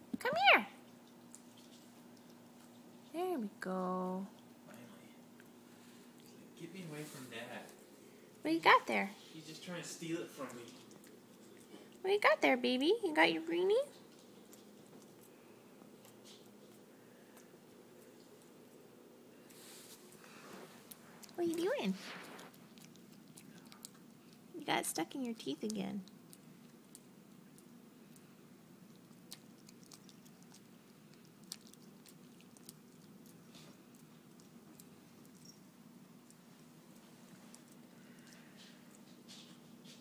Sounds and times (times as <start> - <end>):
Dog: 20.9 - 24.5, 28.9 - 35.7.